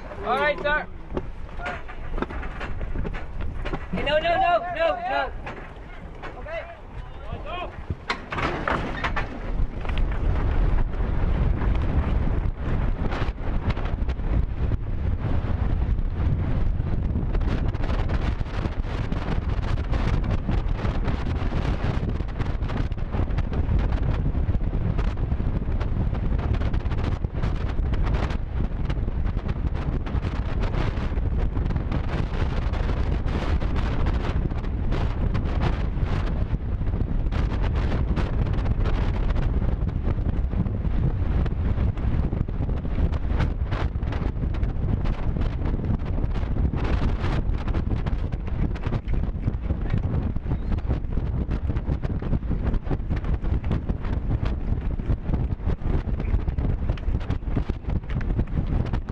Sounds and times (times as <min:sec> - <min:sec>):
Outside, rural or natural: 0:00.0 - 0:59.1.